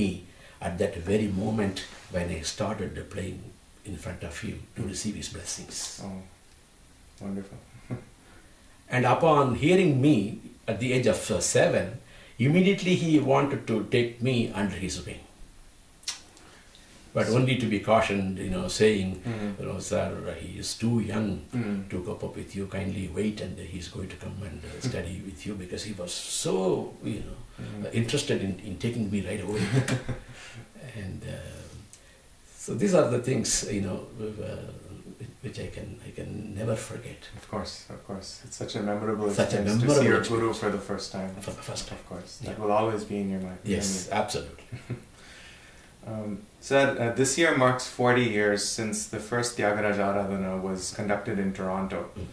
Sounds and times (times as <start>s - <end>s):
Speech: 0.0s - 6.4s, 7.2s - 7.7s, 8.9s - 15.4s, 17.1s - 31.9s, 32.5s - 44.7s, 46.0s - 52.3s
Inside, small room: 0.0s - 52.3s.